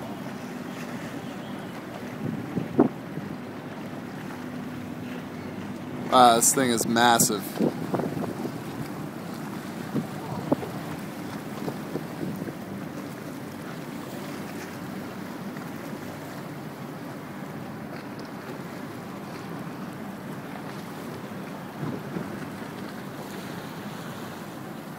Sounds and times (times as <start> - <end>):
Sailboat, sailing ship: 0.0 - 24.9.